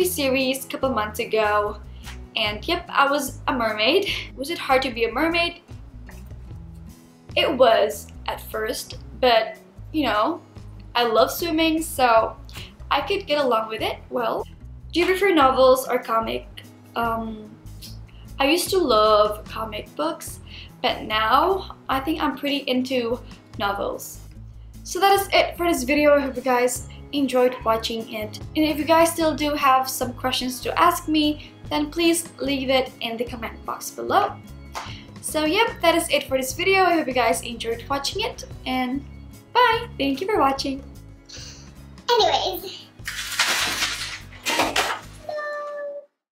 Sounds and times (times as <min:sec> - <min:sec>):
Music: 0:00.0 - 0:46.3.